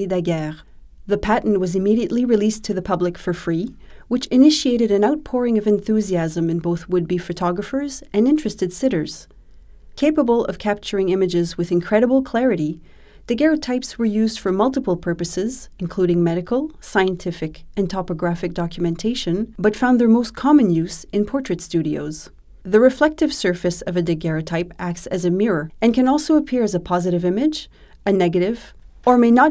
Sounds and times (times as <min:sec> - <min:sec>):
Speech: 0:00.0 - 0:09.3, 0:10.0 - 0:29.5.